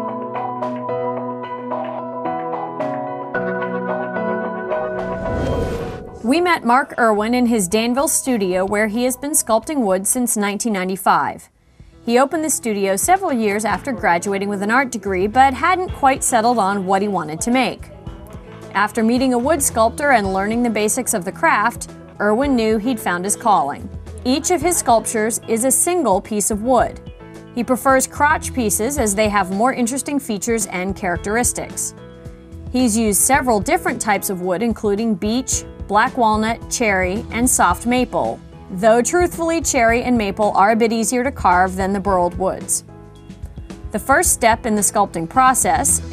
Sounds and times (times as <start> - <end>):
Music: 0.0 - 46.1
Speech: 6.3 - 11.5, 12.1 - 17.9, 18.8 - 27.0, 27.6 - 31.9, 32.8 - 42.8, 44.0 - 46.1.